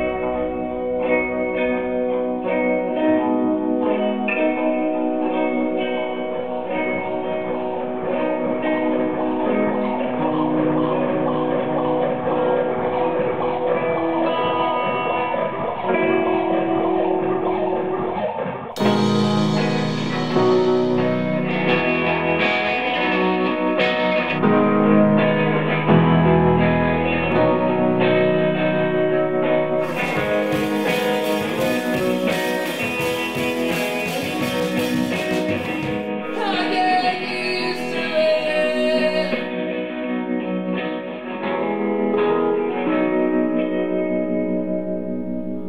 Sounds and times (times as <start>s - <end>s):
Music: 0.0s - 45.6s.